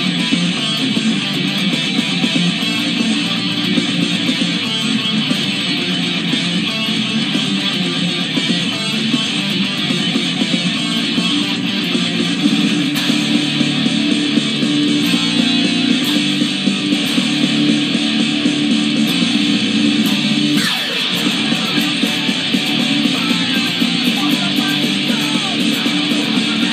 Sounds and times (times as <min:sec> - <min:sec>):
Electric guitar: 0:00.0 - 0:26.7
Strum: 0:00.0 - 0:26.7.